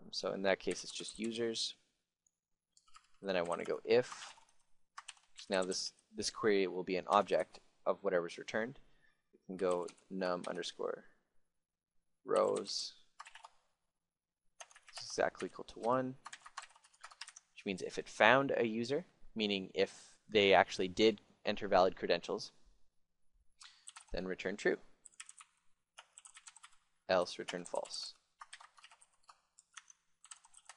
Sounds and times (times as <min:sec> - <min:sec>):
Speech: 0:00.0 - 0:01.8, 0:03.2 - 0:04.2, 0:05.4 - 0:08.8, 0:09.5 - 0:11.1, 0:12.3 - 0:13.0, 0:15.0 - 0:16.2, 0:17.6 - 0:22.6, 0:24.1 - 0:24.8, 0:27.1 - 0:28.2.